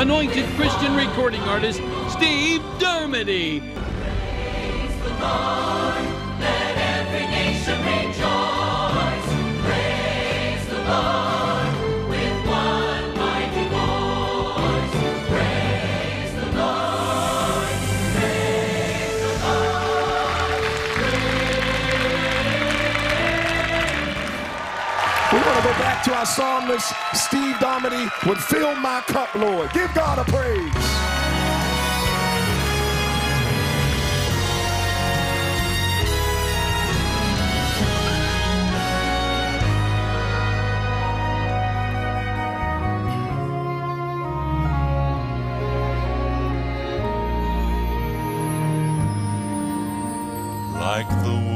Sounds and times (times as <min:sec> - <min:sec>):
Music: 0:00.0 - 0:51.5
Speech: 0:25.4 - 0:30.7, 0:50.8 - 0:51.5.